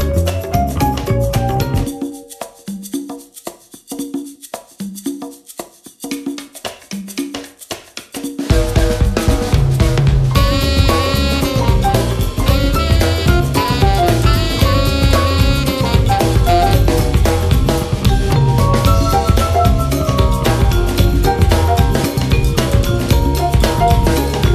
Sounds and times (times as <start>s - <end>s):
Music: 0.0s - 24.5s.